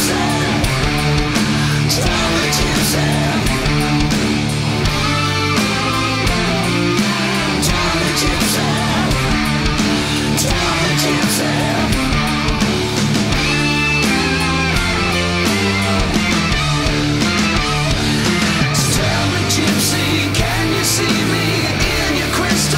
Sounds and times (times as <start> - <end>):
Singing: 0.0 - 4.1, 6.3 - 12.5, 18.8 - 22.7
Heavy metal: 0.0 - 22.7.